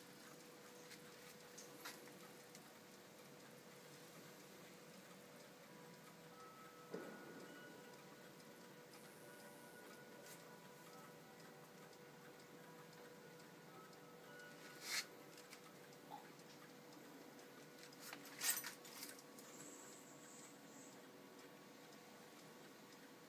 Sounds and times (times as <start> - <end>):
Tick-tock: 0.1 - 23.2.